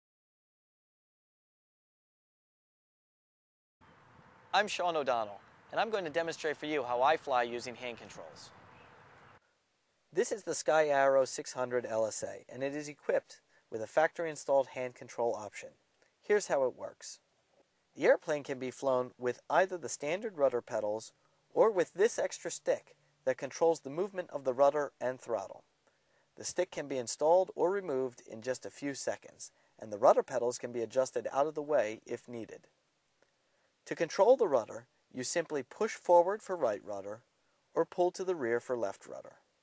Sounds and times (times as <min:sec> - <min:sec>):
Speech: 0:04.6 - 0:08.5, 0:10.2 - 0:17.2, 0:18.0 - 0:25.6, 0:26.4 - 0:32.7, 0:33.9 - 0:37.2, 0:37.8 - 0:39.4.